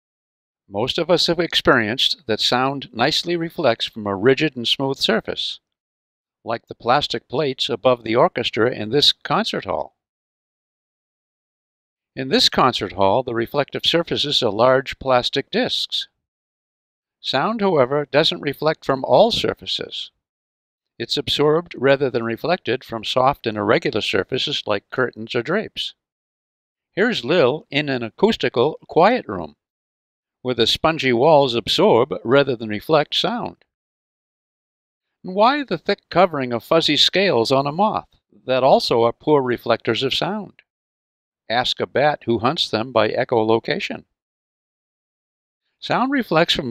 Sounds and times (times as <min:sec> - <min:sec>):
Speech: 0:00.7 - 0:05.7, 0:06.5 - 0:10.0, 0:12.2 - 0:16.2, 0:17.2 - 0:20.2, 0:21.0 - 0:26.0, 0:27.0 - 0:29.6, 0:30.5 - 0:33.6, 0:35.3 - 0:40.7, 0:41.5 - 0:44.1, 0:45.8 - 0:46.7.